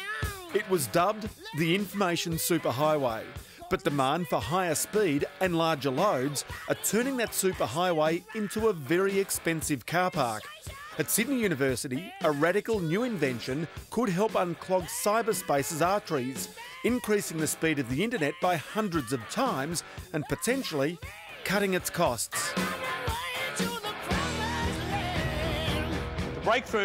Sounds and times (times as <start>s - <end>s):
Speech: 0.0s - 22.6s, 26.4s - 26.8s
Music: 0.0s - 26.8s.